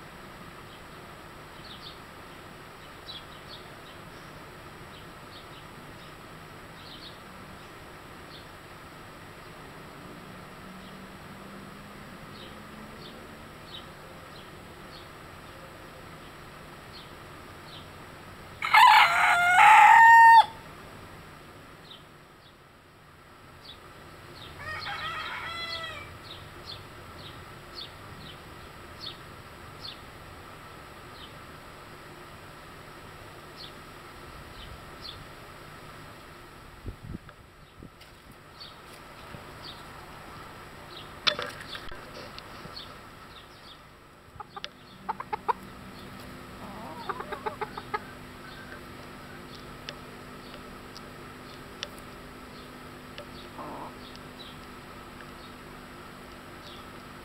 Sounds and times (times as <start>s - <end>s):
Livestock, farm animals, working animals: 24.4s - 27.9s, 40.9s - 57.2s.